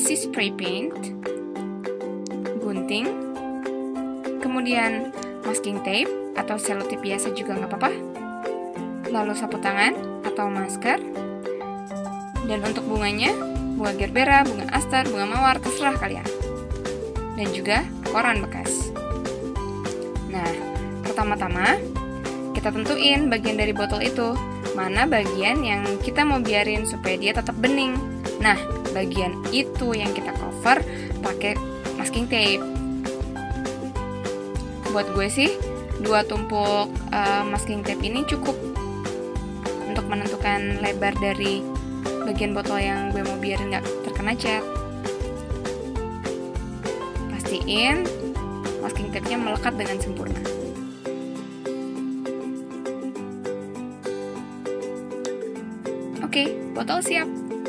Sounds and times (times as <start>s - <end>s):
Speech: 0.0s - 1.1s, 2.6s - 3.2s, 4.4s - 8.0s, 9.1s - 11.0s, 12.4s - 16.3s, 17.4s - 18.9s, 20.3s - 21.8s, 22.6s - 32.6s, 34.9s - 38.6s, 39.8s - 41.6s, 42.2s - 44.7s, 47.3s - 48.1s, 48.8s - 50.7s, 56.2s - 57.3s
Music: 0.0s - 57.6s.